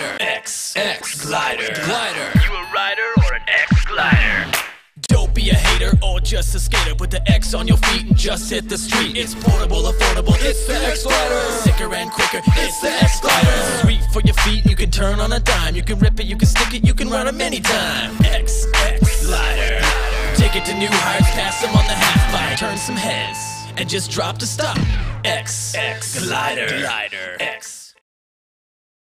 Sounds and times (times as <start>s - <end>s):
Music: 2.3s - 26.0s.